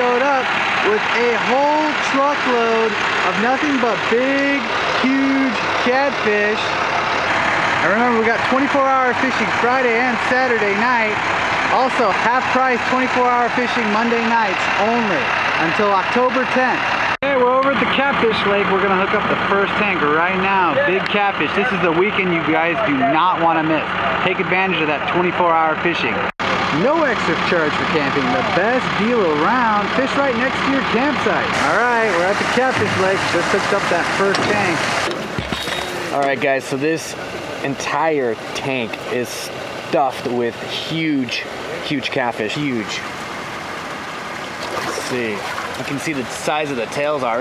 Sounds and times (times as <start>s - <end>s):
Speech: 0.0s - 6.8s, 7.8s - 34.9s, 35.6s - 43.1s, 44.9s - 47.4s
Truck: 0.0s - 47.4s.